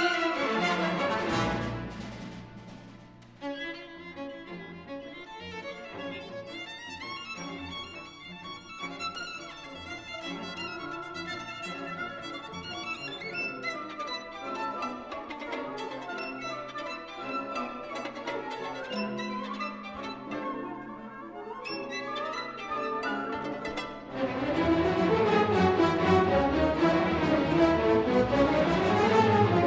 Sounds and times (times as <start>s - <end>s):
Violin, fiddle: 0.0s - 1.8s, 3.4s - 29.6s.